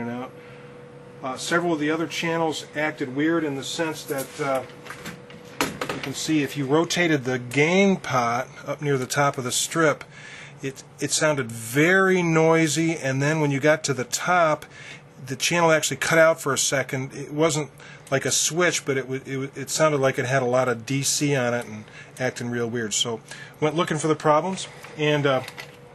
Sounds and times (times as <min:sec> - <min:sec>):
Speech: 0:00.0 - 0:00.3, 0:01.2 - 0:04.7, 0:05.9 - 0:25.6.